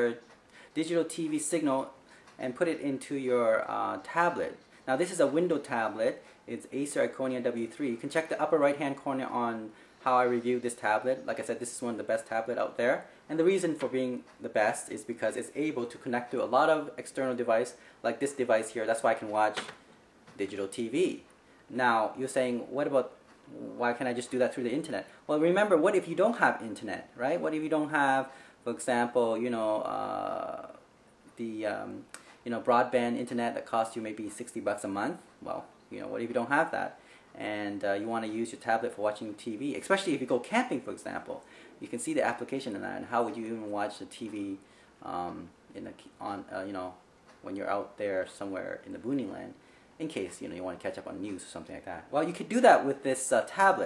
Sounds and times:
Speech: 0.0s - 19.8s, 20.4s - 30.8s, 31.4s - 53.8s.

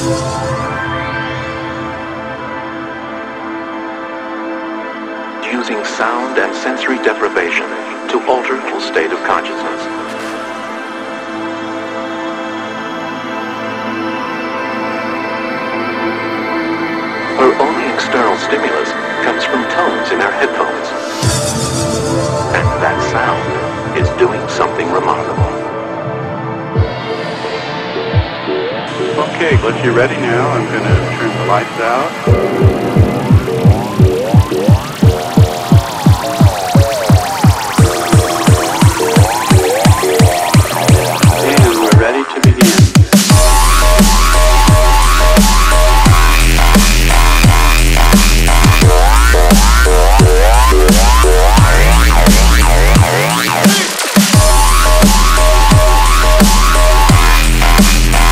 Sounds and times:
Music: 0.0s - 58.3s
Speech: 5.4s - 9.9s, 17.4s - 21.0s, 22.5s - 25.6s, 29.2s - 32.2s, 41.4s - 42.9s.

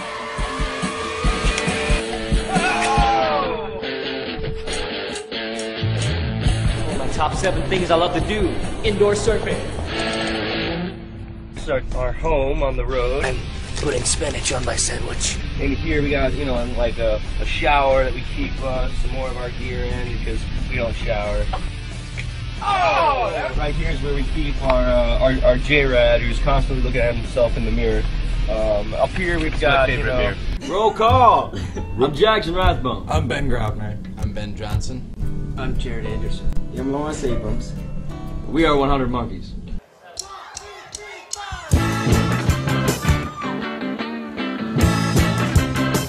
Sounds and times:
Music: 0.0s - 39.5s, 41.2s - 46.0s
Speech: 6.8s - 9.7s, 11.6s - 21.5s, 22.7s - 37.8s.

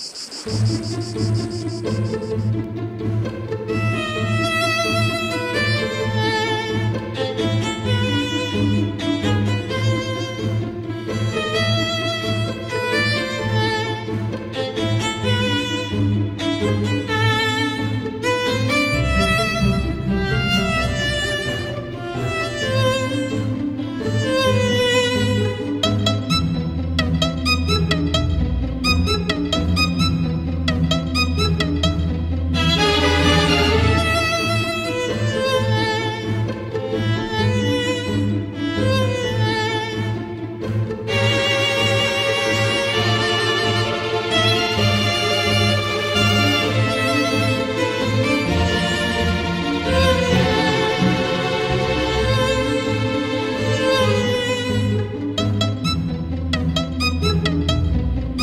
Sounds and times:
Cello: 0.4s - 58.4s.

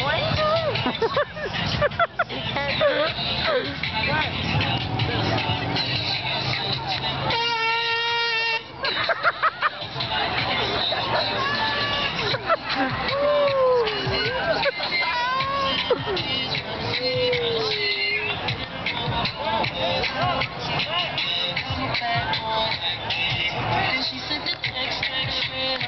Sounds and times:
Music: 0.0s - 25.8s
Air horn, truck horn: 7.3s - 8.7s.

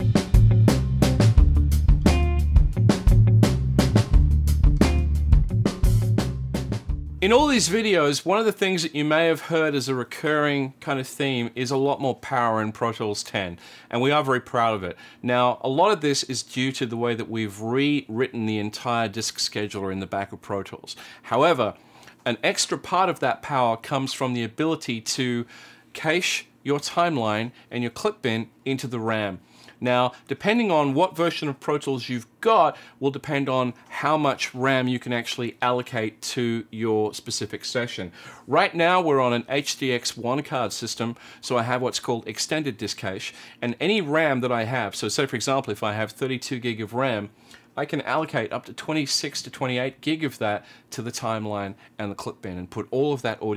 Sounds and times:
Speech: 7.2s - 53.5s.

